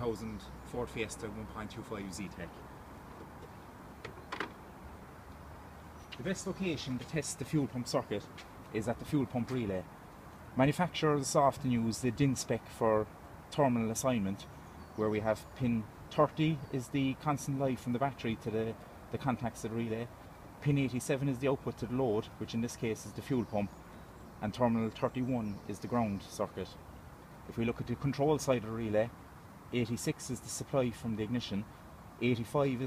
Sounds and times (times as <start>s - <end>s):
Speech: 0.0s - 2.6s, 6.2s - 9.9s, 10.6s - 23.8s, 24.4s - 26.8s, 27.5s - 32.8s.